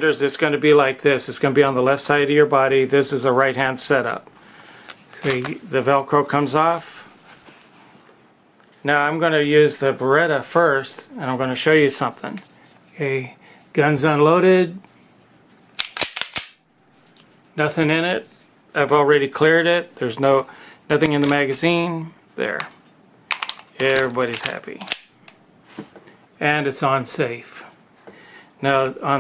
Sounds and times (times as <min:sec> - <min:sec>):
Speech: 0:00.0 - 0:04.3, 0:05.2 - 0:07.1, 0:08.8 - 0:14.8, 0:17.6 - 0:22.7, 0:23.8 - 0:24.9, 0:26.4 - 0:27.8, 0:28.6 - 0:29.2
Inside, small room: 0:00.0 - 0:29.2.